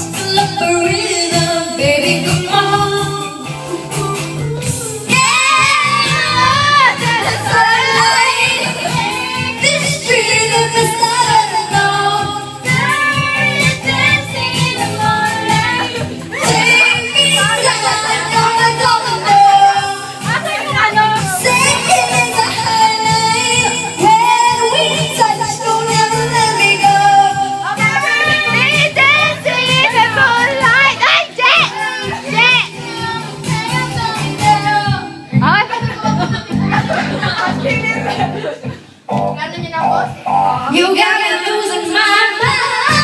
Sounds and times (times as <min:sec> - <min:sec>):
Female singing: 0:00.0 - 0:36.8, 0:40.7 - 0:43.0
Choir: 0:04.6 - 0:35.1.